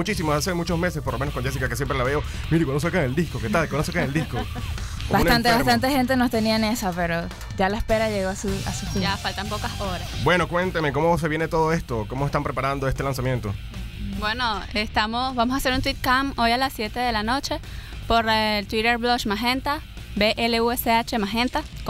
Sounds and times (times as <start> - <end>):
Speech: 0.0 - 4.5, 5.1 - 13.6
Music: 0.0 - 21.8.